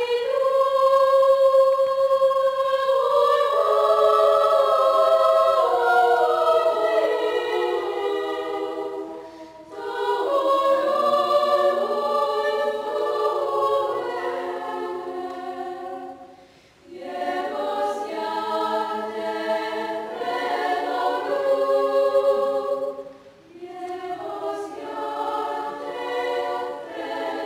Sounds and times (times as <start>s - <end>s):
Choir: 0.0s - 27.4s.